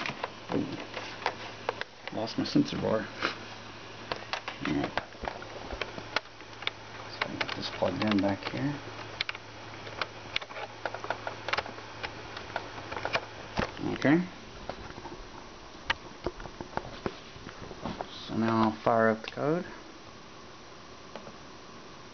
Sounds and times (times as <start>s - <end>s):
Inside, small room: 0.0s - 22.1s
Speech: 2.1s - 3.1s, 4.6s - 5.0s, 7.1s - 8.8s, 13.8s - 14.4s, 18.1s - 19.8s.